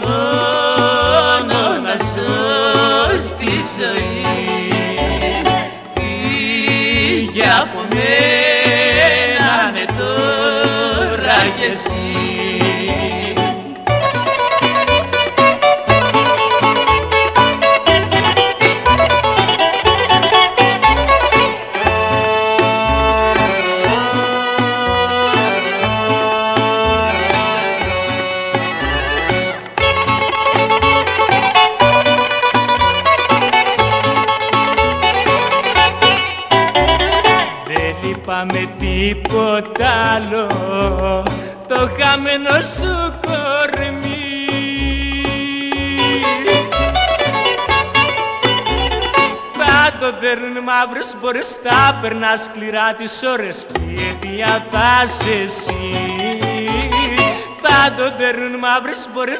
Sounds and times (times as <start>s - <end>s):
Music: 0.0s - 59.3s.